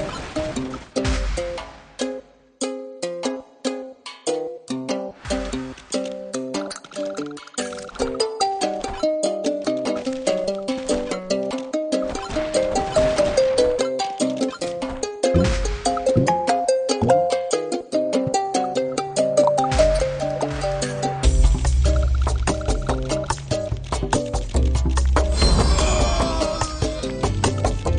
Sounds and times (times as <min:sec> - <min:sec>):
Music: 0:00.0 - 0:27.9.